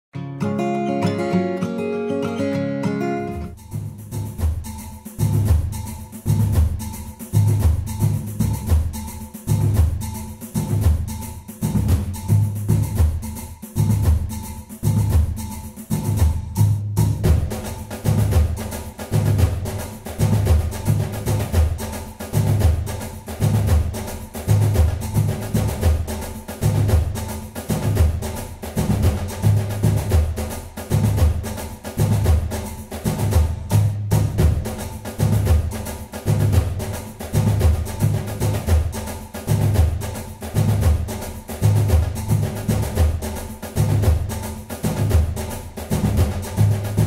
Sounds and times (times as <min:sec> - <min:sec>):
Percussion: 0:00.5 - 0:47.0.